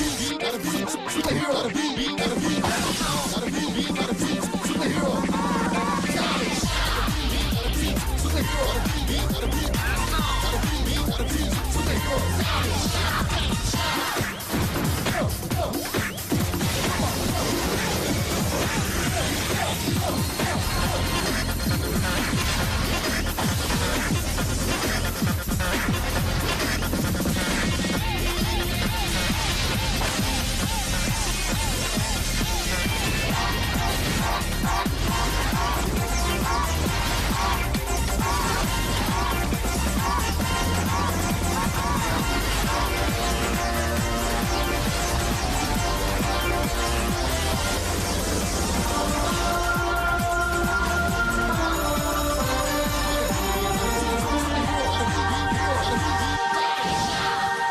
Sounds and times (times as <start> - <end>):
Music: 0.0 - 57.7.